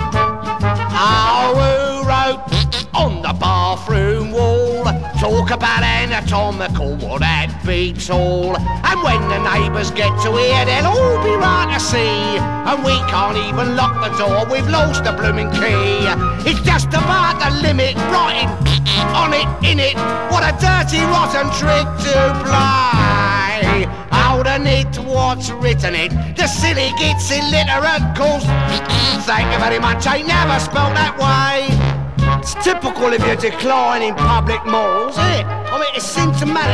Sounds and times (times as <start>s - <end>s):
Music: 0.0s - 36.7s.